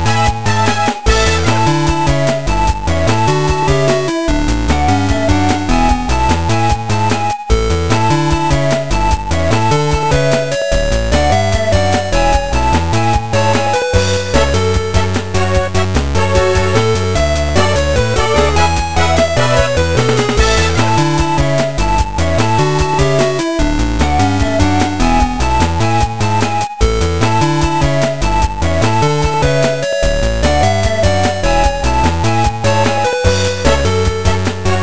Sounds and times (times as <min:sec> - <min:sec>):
Video game music: 0:00.0 - 0:34.8.